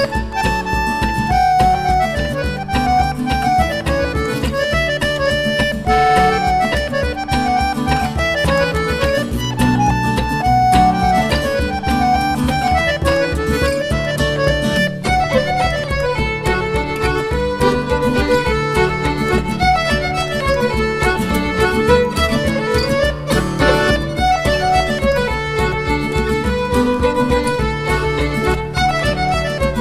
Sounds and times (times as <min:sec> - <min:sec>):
Violin, fiddle: 0:00.0 - 0:29.8.